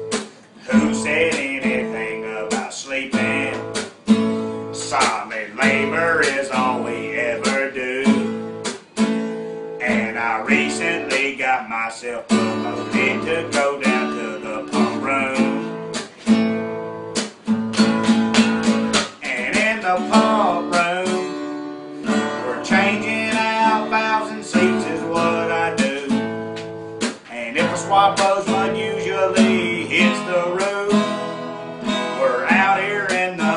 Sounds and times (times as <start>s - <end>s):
Music: 0.0s - 33.5s.